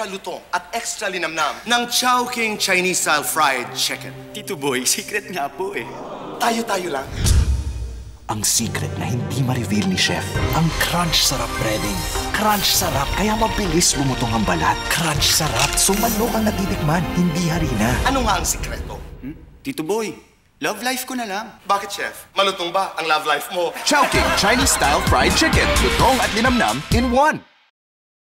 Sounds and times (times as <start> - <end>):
Speech: 0.0 - 7.1, 8.3 - 27.4
Music: 1.6 - 19.5, 23.8 - 27.7.